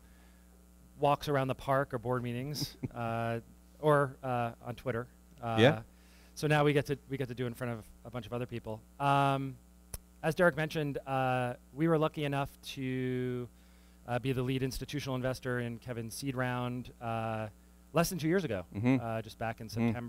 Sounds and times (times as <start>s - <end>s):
Speech: 1.0s - 5.8s, 6.4s - 9.6s, 10.2s - 13.5s, 14.1s - 20.0s.